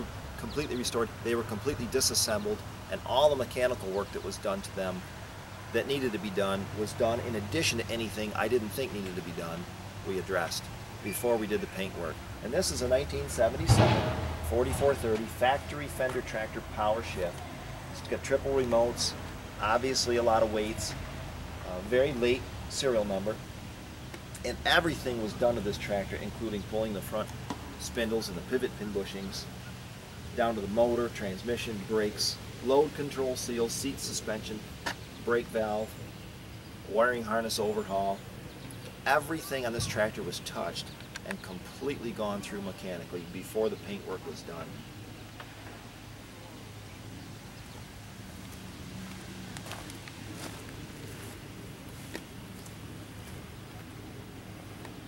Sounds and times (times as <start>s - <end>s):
Speech: 0.0s - 5.0s, 5.7s - 21.0s, 21.6s - 23.4s, 24.4s - 29.5s, 30.4s - 36.0s, 36.9s - 38.2s, 39.0s - 44.8s.